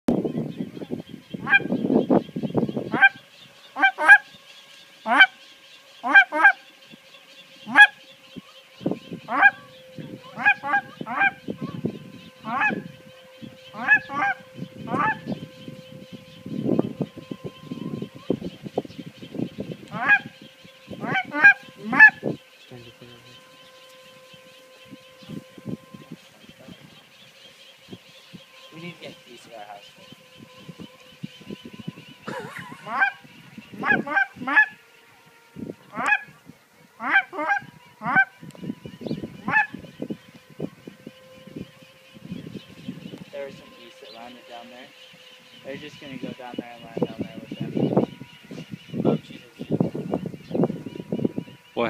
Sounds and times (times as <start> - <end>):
Outside, rural or natural: 0.0 - 51.8.